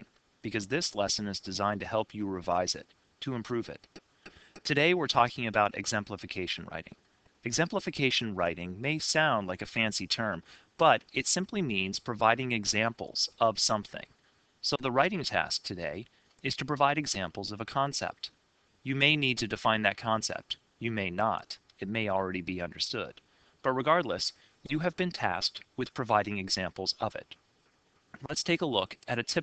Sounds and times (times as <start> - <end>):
Speech: 0.0 - 4.0, 4.6 - 27.4, 28.2 - 29.4.